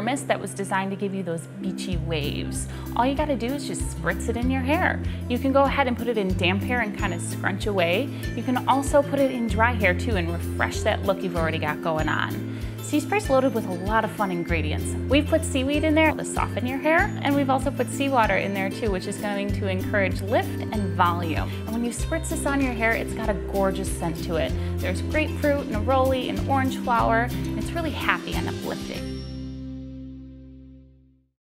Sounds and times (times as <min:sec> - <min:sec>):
Speech: 0:00.0 - 0:29.0
Music: 0:00.0 - 0:31.4.